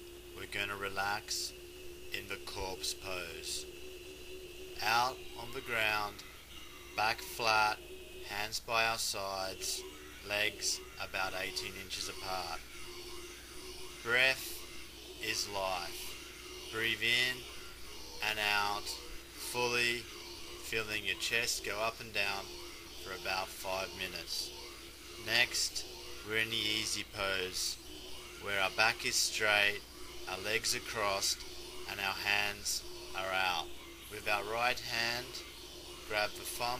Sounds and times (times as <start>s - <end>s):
Speech: 0.4s - 1.5s, 2.2s - 3.6s, 4.8s - 6.3s, 7.0s - 12.6s, 14.0s - 14.6s, 15.2s - 24.5s, 25.2s - 27.8s, 28.4s - 35.5s, 36.1s - 36.7s.